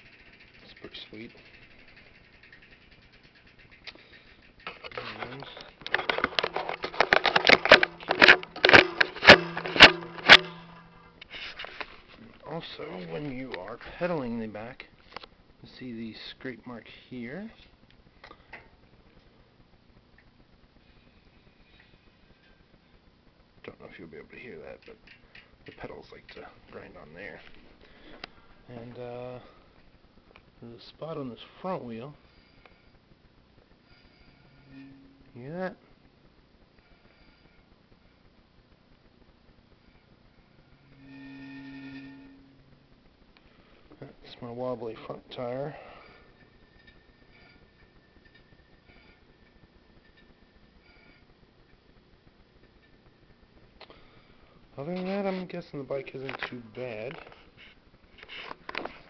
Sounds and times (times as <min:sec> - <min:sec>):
Speech: 0:00.6 - 0:01.4, 0:05.0 - 0:05.7, 0:12.2 - 0:14.9, 0:15.6 - 0:17.6, 0:23.6 - 0:25.0, 0:25.7 - 0:27.5, 0:28.7 - 0:29.5, 0:30.6 - 0:32.2, 0:44.0 - 0:45.8, 0:54.8 - 0:57.3.